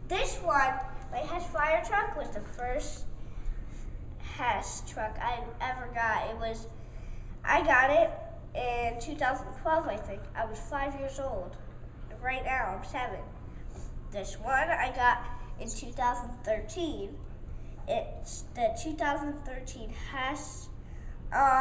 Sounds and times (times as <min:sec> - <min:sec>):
Speech: 0:00.1 - 0:03.1, 0:04.2 - 0:06.8, 0:07.4 - 0:13.4, 0:14.1 - 0:17.2, 0:17.9 - 0:21.6.